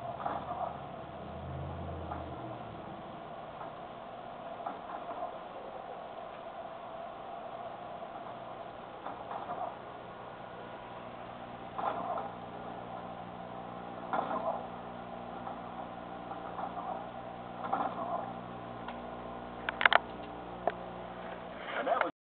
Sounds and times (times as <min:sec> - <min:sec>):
Speech: 0:21.7 - 0:22.1.